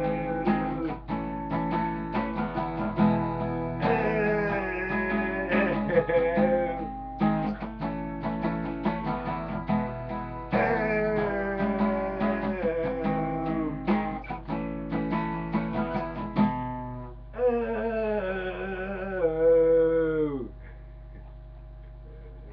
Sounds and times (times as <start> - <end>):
Guitar: 0.0 - 22.5.